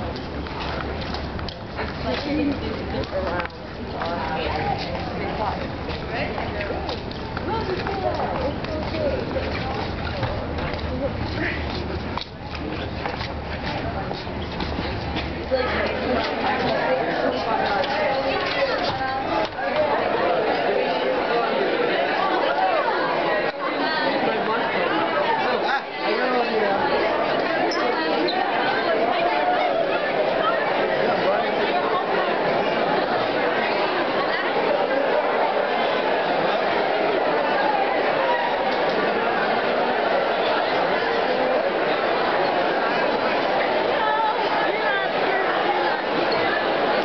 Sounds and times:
Speech: 0.0s - 47.0s
Walk, footsteps: 0.1s - 15.4s.

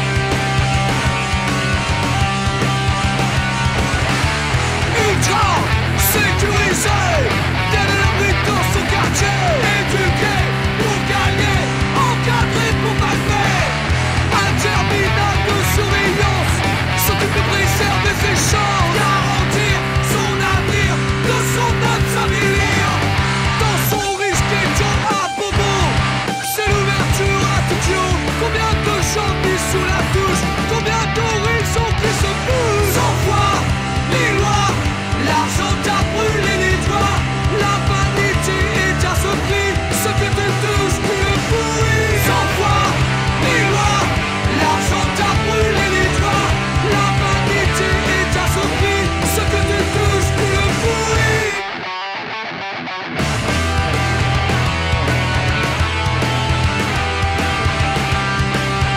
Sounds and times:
Music: 0.0s - 58.9s.

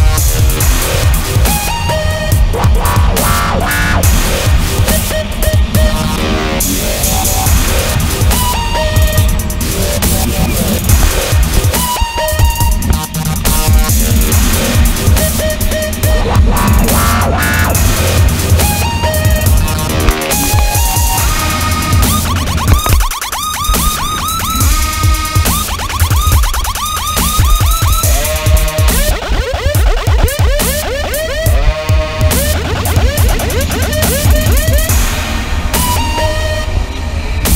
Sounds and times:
Music: 0.0s - 37.5s.

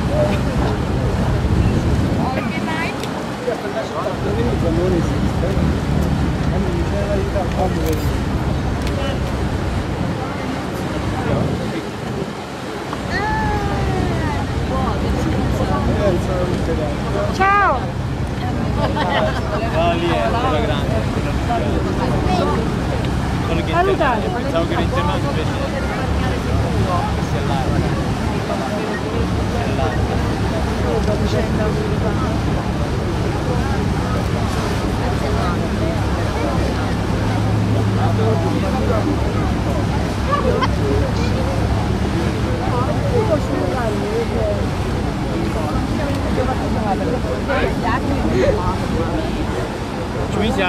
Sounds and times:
Wind noise (microphone): 0.0s - 3.0s, 8.3s - 12.5s.

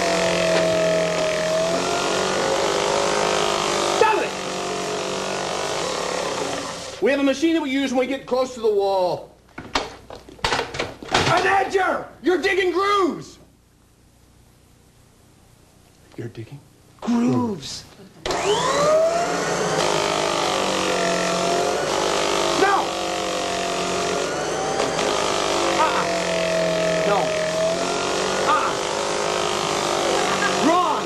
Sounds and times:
Male speech, man speaking: 4.0s - 4.4s, 7.0s - 9.3s, 11.3s - 13.4s, 16.2s - 17.9s, 22.6s - 22.9s, 27.0s - 27.4s, 28.5s - 28.8s, 30.6s - 31.0s.

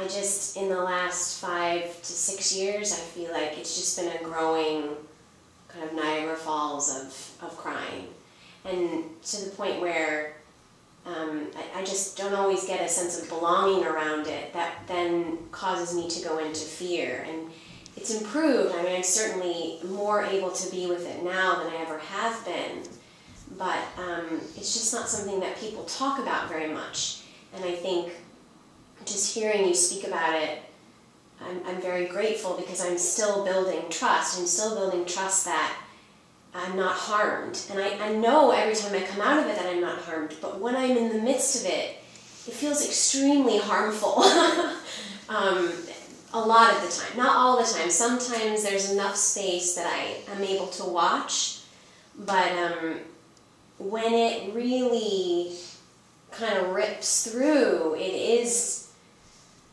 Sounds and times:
Speech: 0.0s - 5.0s, 5.7s - 10.4s, 11.1s - 28.3s, 29.0s - 30.7s, 31.4s - 35.8s, 36.6s - 51.6s, 52.2s - 53.2s, 53.8s - 55.8s, 56.4s - 58.9s.

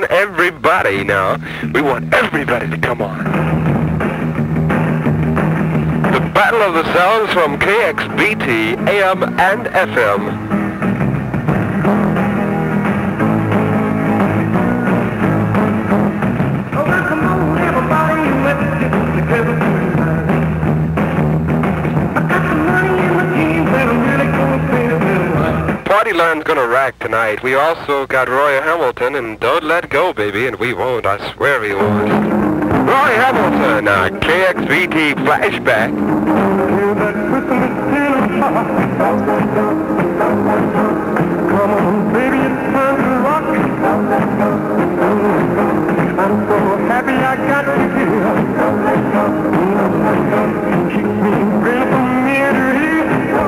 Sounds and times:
Radio: 0.0s - 3.2s, 6.1s - 10.4s, 25.4s - 35.9s
Speech: 0.0s - 3.2s, 6.1s - 10.4s, 25.4s - 32.3s, 32.9s - 35.9s
Music: 0.0s - 53.4s.

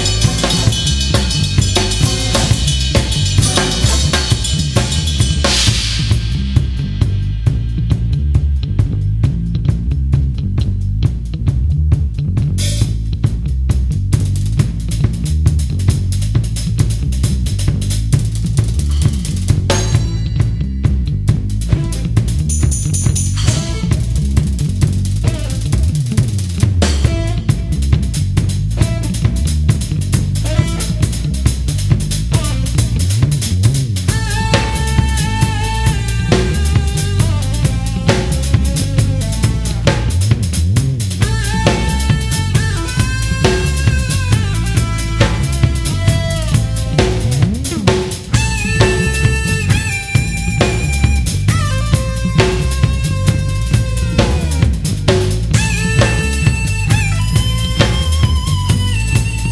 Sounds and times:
Rimshot: 0.0s - 9.2s, 15.8s - 20.7s, 21.4s - 59.5s
Bass drum: 0.0s - 59.5s
Drum kit: 0.0s - 59.5s
Drum roll: 0.0s - 59.5s.

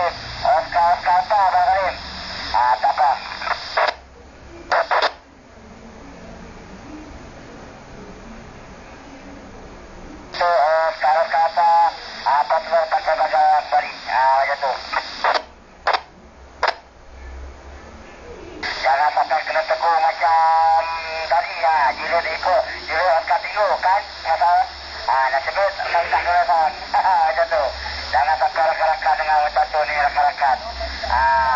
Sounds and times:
Radio: 0.0s - 4.0s, 4.7s - 5.2s, 10.3s - 16.9s, 18.5s - 31.5s
Speech: 0.0s - 9.4s, 10.4s - 15.4s, 17.8s - 31.5s.

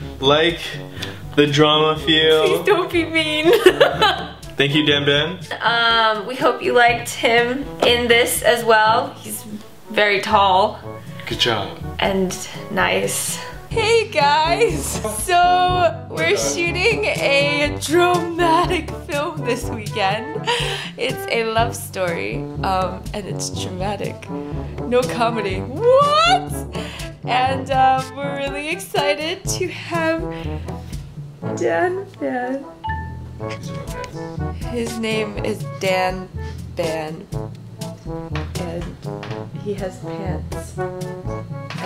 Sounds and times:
Music: 0.0s - 41.8s
Speech: 4.6s - 10.7s, 13.8s - 20.2s, 24.9s - 26.5s, 34.8s - 36.2s.

